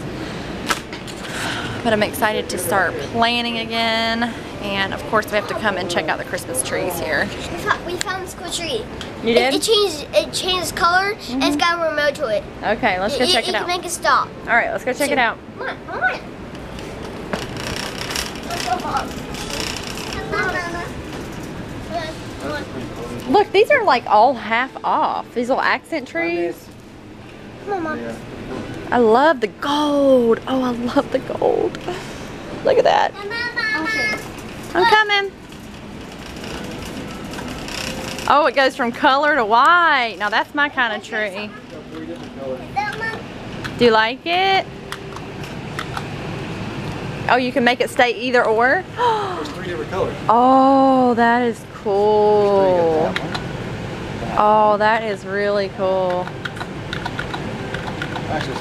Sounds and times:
Child speech, kid speaking: 0:05.3 - 0:05.9, 0:07.4 - 0:14.4, 0:15.0 - 0:16.3, 0:18.5 - 0:21.0, 0:21.8 - 0:24.0, 0:27.6 - 0:28.2, 0:29.6 - 0:31.2, 0:33.0 - 0:35.3, 0:40.8 - 0:41.8, 0:42.5 - 0:43.3.

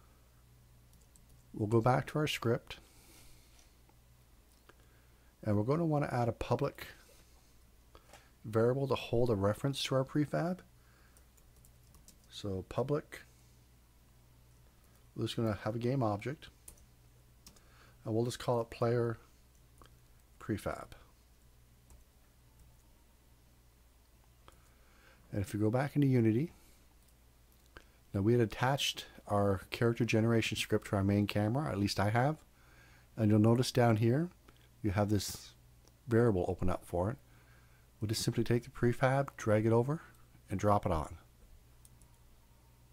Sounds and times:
Inside, small room: 0:00.0 - 0:42.9
Speech: 0:01.6 - 0:02.8, 0:05.4 - 0:07.0, 0:08.4 - 0:10.7, 0:12.3 - 0:13.3, 0:15.2 - 0:16.6, 0:18.0 - 0:19.2, 0:20.4 - 0:21.1, 0:25.3 - 0:26.6, 0:28.1 - 0:32.4, 0:33.2 - 0:37.2, 0:38.0 - 0:41.3.

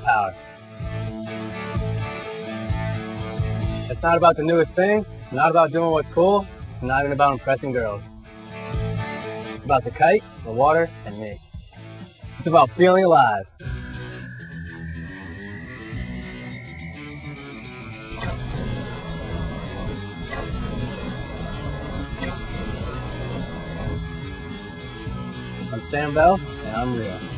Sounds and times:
Speech: 0:00.0 - 0:00.4, 0:03.9 - 0:08.0, 0:09.6 - 0:11.4, 0:12.4 - 0:13.5, 0:25.7 - 0:27.3
Music: 0:00.0 - 0:27.3.

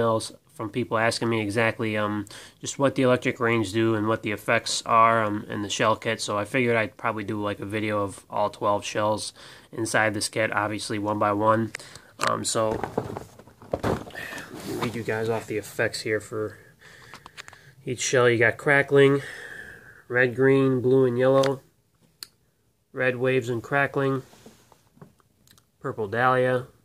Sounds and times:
Speech: 0:00.0 - 0:12.8, 0:14.7 - 0:16.6, 0:17.8 - 0:19.3, 0:20.1 - 0:21.7, 0:22.9 - 0:24.3, 0:25.8 - 0:26.8.

